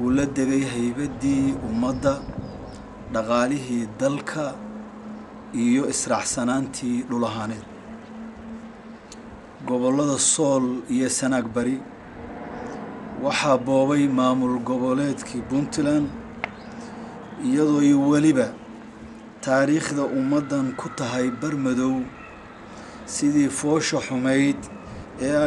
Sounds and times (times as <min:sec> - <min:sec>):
Male speech, man speaking: 0:00.0 - 0:02.3, 0:03.1 - 0:04.6, 0:05.6 - 0:07.7, 0:09.6 - 0:11.9, 0:13.2 - 0:16.2, 0:17.4 - 0:18.6, 0:19.4 - 0:22.2, 0:23.1 - 0:25.4
Narration, monologue: 0:00.0 - 0:25.4.